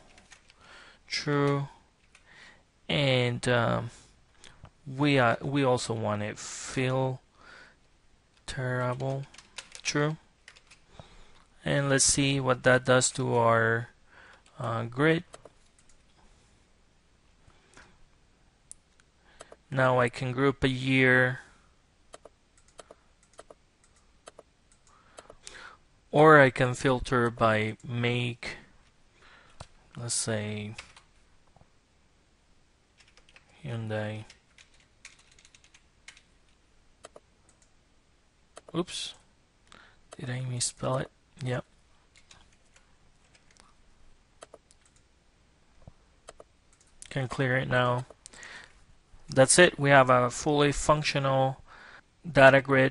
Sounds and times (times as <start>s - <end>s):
Speech: 1.1s - 1.8s, 2.9s - 4.0s, 4.8s - 7.2s, 8.5s - 10.2s, 11.6s - 14.0s, 14.6s - 15.3s, 19.7s - 21.5s, 26.1s - 28.7s, 30.0s - 30.8s, 33.6s - 34.3s, 38.7s - 39.2s, 40.2s - 41.7s, 47.0s - 48.1s, 49.3s - 51.6s, 52.3s - 52.9s.